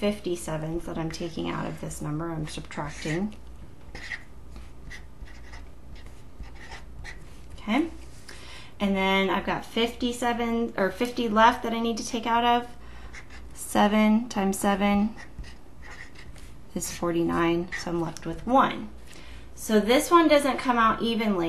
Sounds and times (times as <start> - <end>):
Speech: 0.0 - 3.4, 7.6 - 8.0, 8.8 - 12.7, 13.6 - 15.2, 16.8 - 18.9, 19.6 - 21.4
Inside, small room: 0.0 - 21.4
Writing: 2.4 - 7.6, 13.1 - 13.6, 15.1 - 16.6, 17.6 - 18.5.